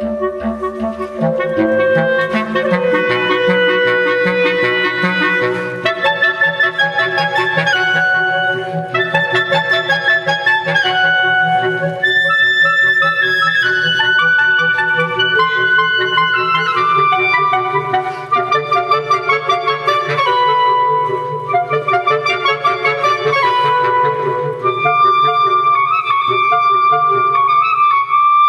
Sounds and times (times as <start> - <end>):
Clarinet: 0.0 - 28.4.